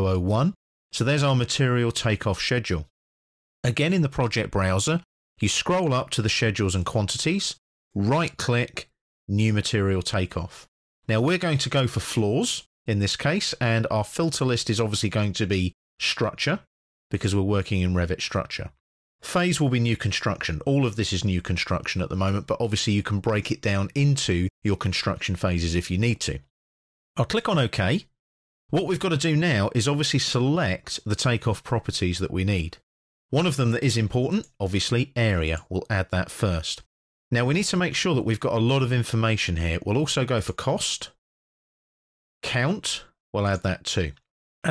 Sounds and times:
Speech: 0.0 - 2.9, 3.6 - 26.5, 27.2 - 28.1, 28.7 - 41.2, 42.4 - 44.7.

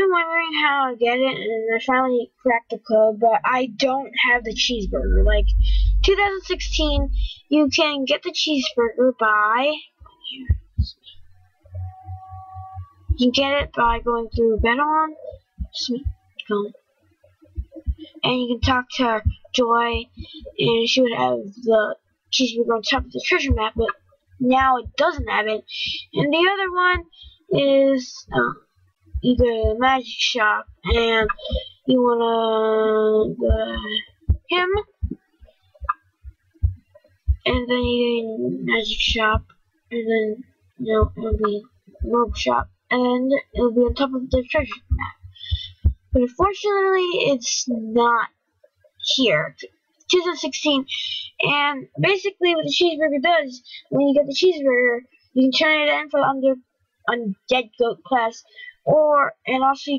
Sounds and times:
Speech: 0.0 - 11.2, 13.1 - 16.7, 17.9 - 28.6, 29.2 - 35.0, 37.5 - 48.3, 49.0 - 59.9.

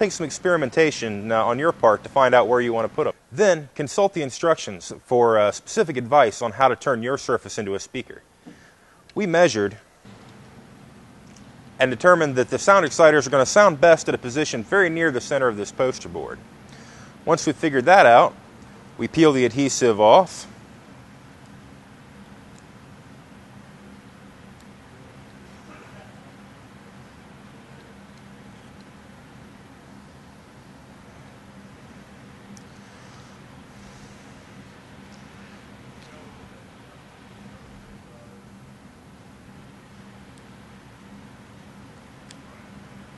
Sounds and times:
Speech: 0.0 - 8.2, 9.2 - 9.8, 11.8 - 16.4, 17.2 - 18.4, 19.0 - 20.6, 25.6 - 26.3, 36.0 - 36.7, 38.0 - 38.5.

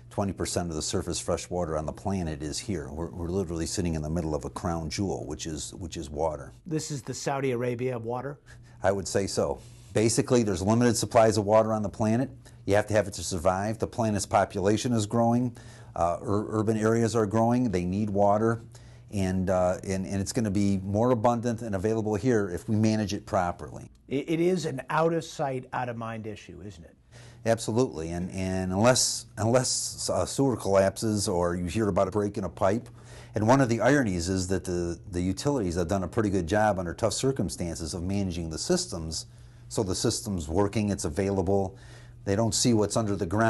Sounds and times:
Speech: 0.1 - 43.4.

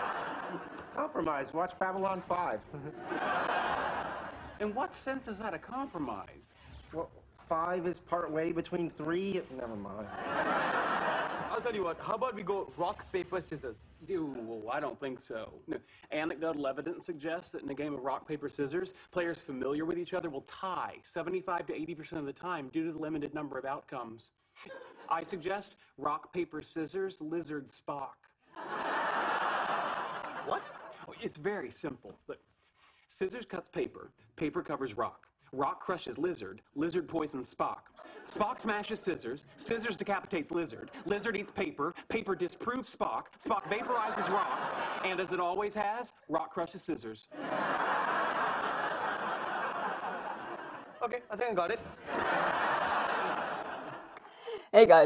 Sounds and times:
Speech: 1.0 - 2.7, 4.6 - 10.1, 11.5 - 24.4, 25.0 - 28.3, 30.4 - 32.5, 33.1 - 47.3, 51.0 - 51.9, 54.7 - 55.0.

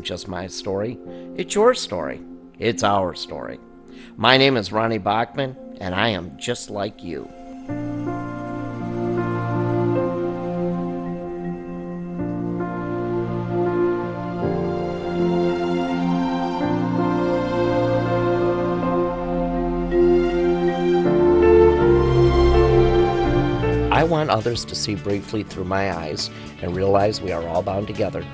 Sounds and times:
Speech: 0.0 - 3.6, 4.2 - 7.3, 23.9 - 28.3
Music: 0.0 - 28.3.

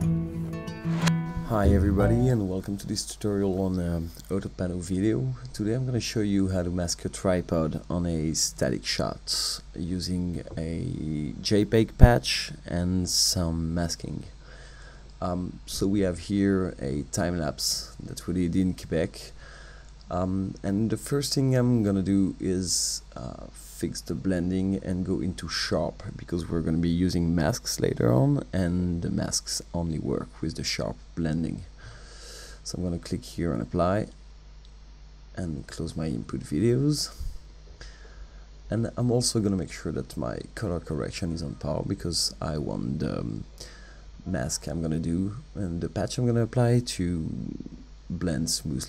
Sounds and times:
Speech: 1.4 - 14.4, 15.2 - 19.4, 20.1 - 31.8, 32.6 - 34.2, 35.3 - 37.4, 38.7 - 43.6, 44.2 - 48.8.

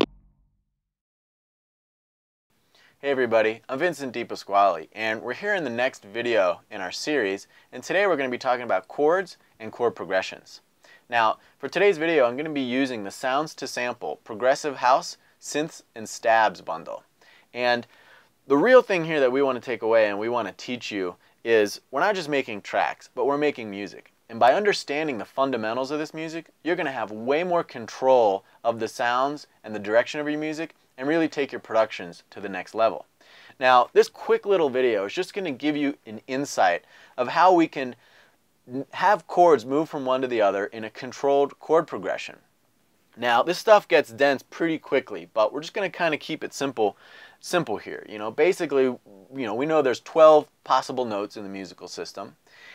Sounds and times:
Speech: 3.0 - 17.9, 18.5 - 38.0, 38.7 - 42.5, 43.2 - 52.4.

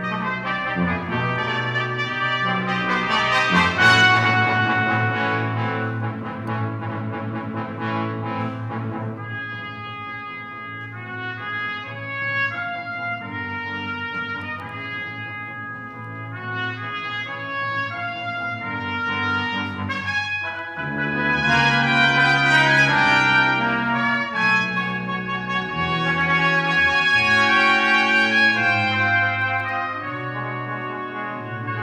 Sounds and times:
French horn: 0.0 - 31.8
Trumpet: 0.0 - 31.8.

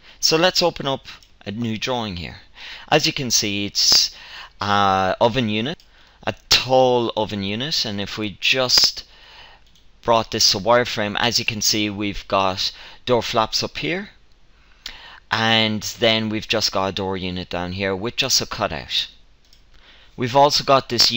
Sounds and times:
Speech: 0.2 - 9.1, 10.0 - 14.2, 15.3 - 19.2, 20.2 - 21.1.

